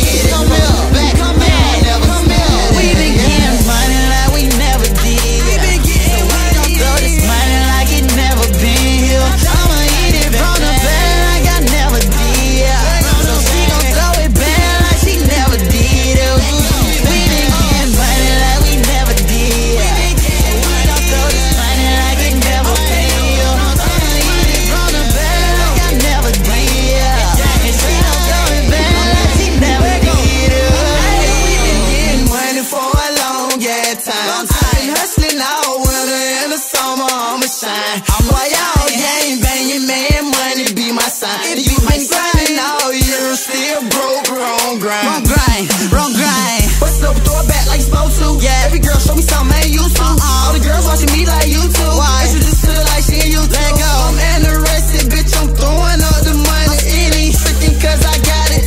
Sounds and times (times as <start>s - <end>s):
Music: 0.0s - 58.6s
Singing: 0.0s - 58.6s.